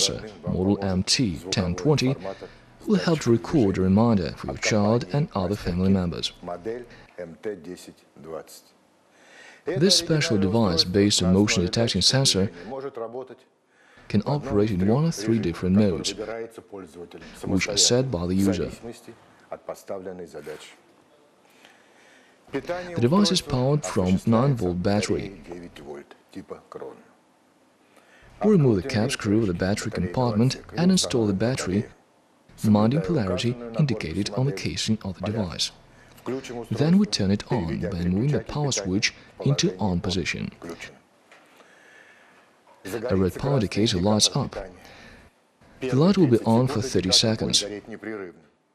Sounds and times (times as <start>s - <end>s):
Speech: 0.0s - 8.8s, 9.7s - 20.8s, 22.5s - 27.2s, 28.4s - 32.0s, 32.6s - 41.0s, 42.8s - 44.9s, 45.8s - 48.6s.